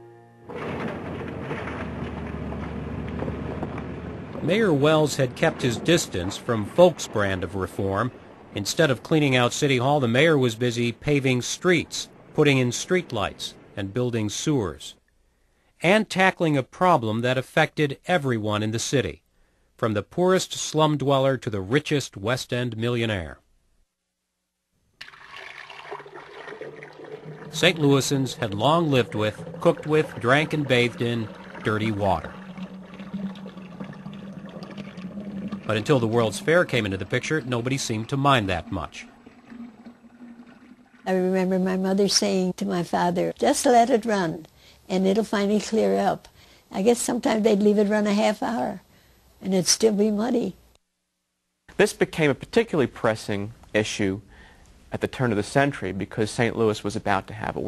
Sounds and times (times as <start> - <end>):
Speech: 4.4 - 15.0, 15.8 - 19.2, 19.8 - 23.4, 27.6 - 32.3, 35.7 - 39.1, 41.1 - 48.8, 49.4 - 50.6, 51.7 - 54.2, 54.9 - 57.6.